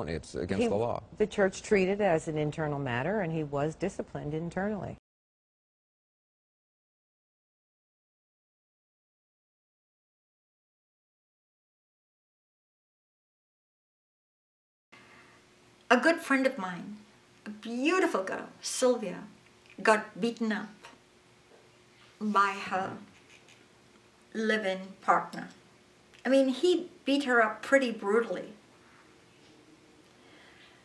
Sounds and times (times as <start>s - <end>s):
Speech: 0.0s - 5.0s, 15.9s - 21.0s, 22.2s - 23.1s, 24.4s - 25.6s, 26.2s - 28.6s.